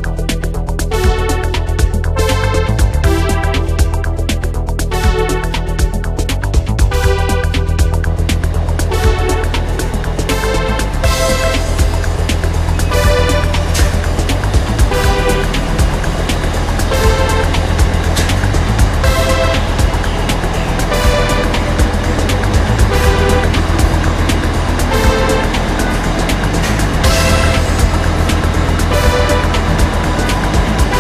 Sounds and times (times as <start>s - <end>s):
Music: 0.0s - 31.0s
Vehicle: 0.0s - 31.0s.